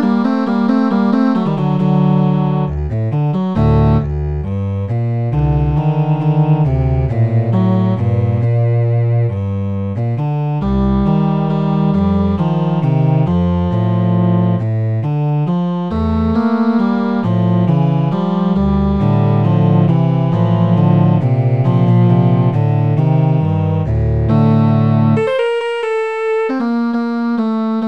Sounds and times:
Cello: 0.0 - 25.3.

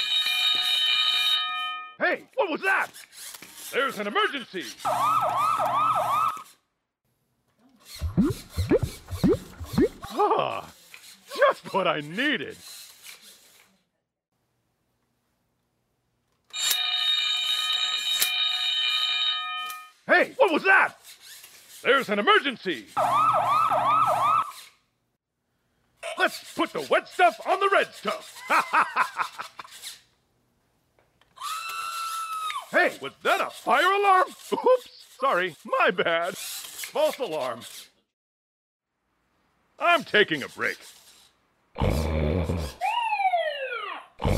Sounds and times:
Speech: 2.0 - 2.9, 3.8 - 4.8, 11.3 - 12.6, 20.1 - 21.0, 21.9 - 22.9, 26.1 - 28.2, 32.8 - 36.4, 37.0 - 37.7, 39.8 - 40.9.

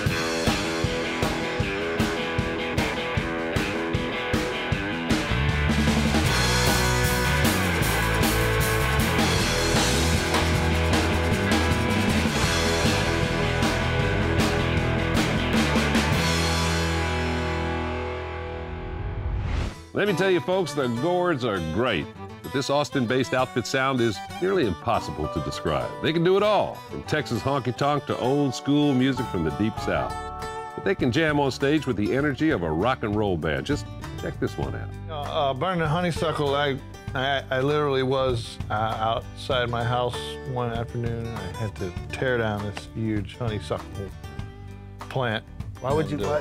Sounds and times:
Music: 0.0 - 46.4
Speech: 20.0 - 30.2, 30.8 - 44.1, 45.1 - 46.4.

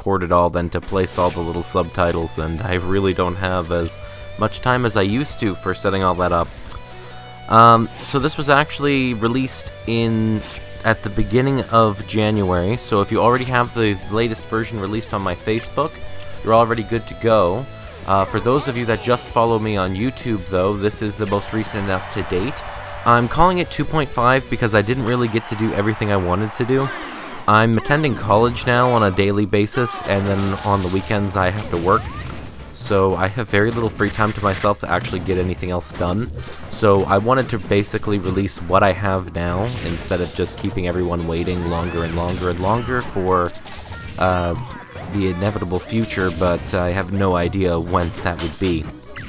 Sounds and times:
Speech: 0.0 - 6.5, 7.5 - 32.2, 32.8 - 49.1
Music: 0.0 - 49.2.

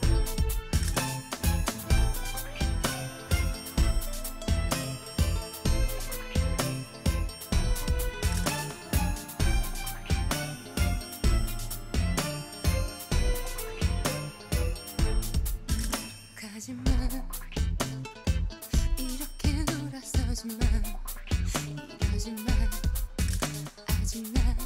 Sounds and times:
Jingle, tinkle: 0.0 - 17.5, 18.6 - 20.7.

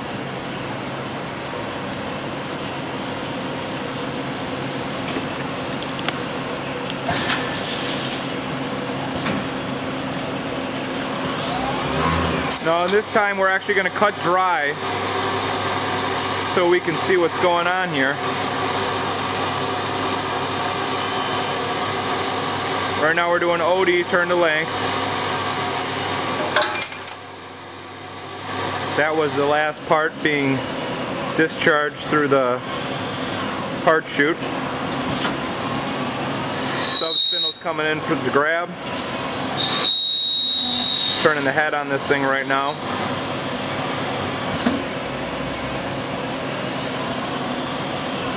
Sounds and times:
Speech: 12.6 - 14.8, 16.5 - 18.2, 23.0 - 24.7, 29.0 - 30.7, 31.4 - 32.6, 33.9 - 34.4, 37.0 - 38.8, 41.2 - 42.8.

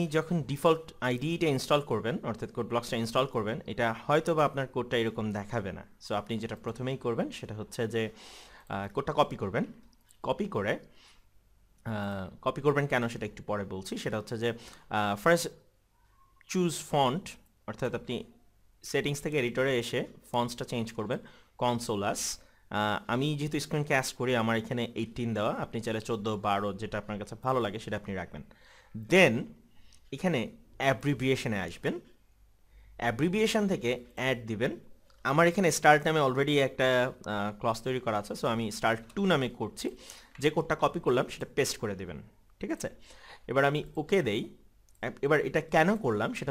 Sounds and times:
Speech: 0.0 - 10.9, 11.8 - 15.6, 16.4 - 32.1, 33.0 - 46.5.

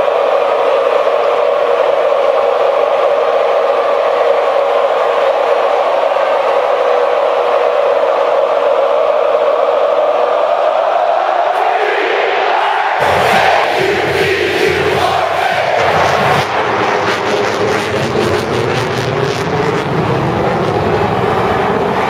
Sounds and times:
Cheering: 0.0 - 22.0.

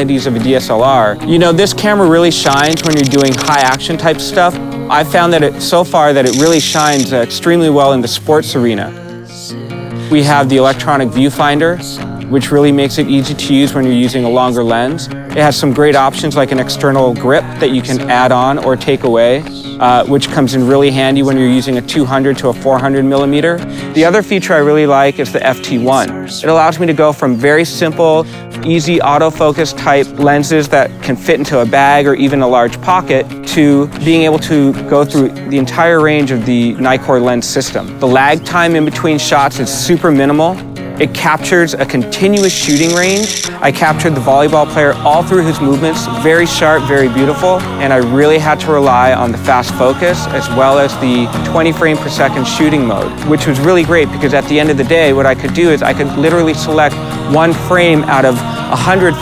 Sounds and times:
Music: 0.0 - 59.2
Speech: 0.0 - 59.2.

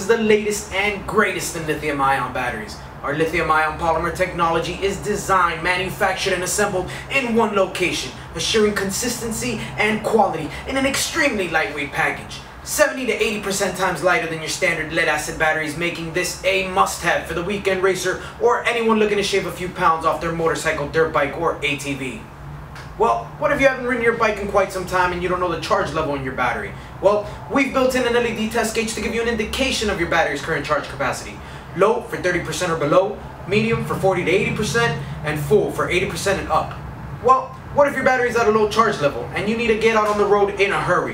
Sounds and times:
Speech: 0.0 - 22.3, 23.0 - 41.1.

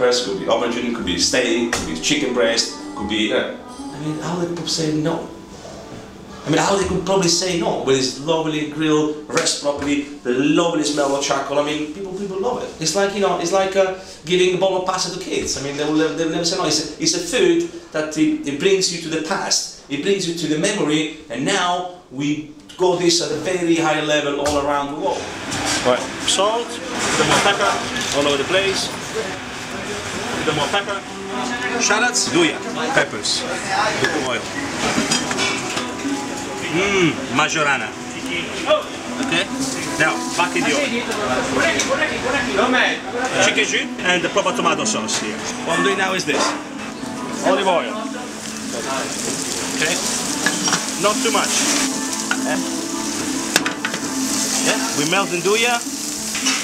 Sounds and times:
Speech: 0.0 - 5.3, 6.5 - 25.2, 50.9 - 51.6, 54.6 - 55.9.

